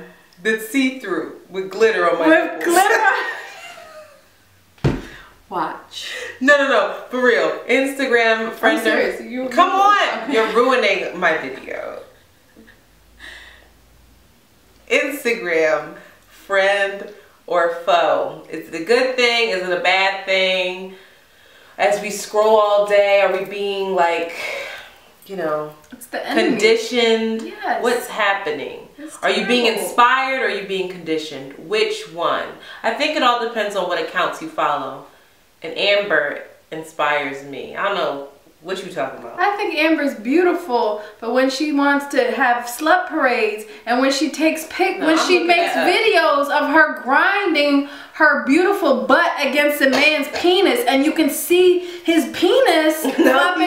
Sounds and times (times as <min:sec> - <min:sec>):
Speech: 0:00.0 - 0:03.4, 0:05.5 - 0:12.1, 0:14.9 - 0:21.0, 0:21.8 - 0:24.5, 0:25.3 - 0:53.6
Laughter: 0:02.8 - 0:04.2, 0:53.0 - 0:53.6.